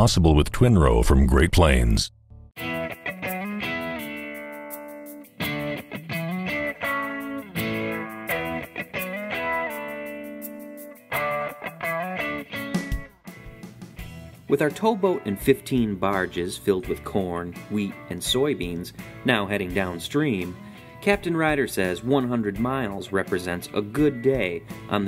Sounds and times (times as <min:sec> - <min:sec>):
Speech: 0:00.0 - 0:02.1, 0:14.5 - 0:25.0
Music: 0:02.3 - 0:25.0.